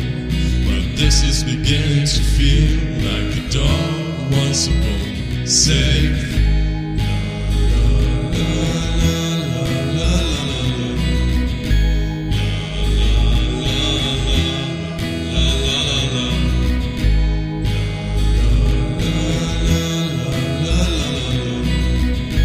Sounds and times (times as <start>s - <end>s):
Music: 0.0s - 22.4s.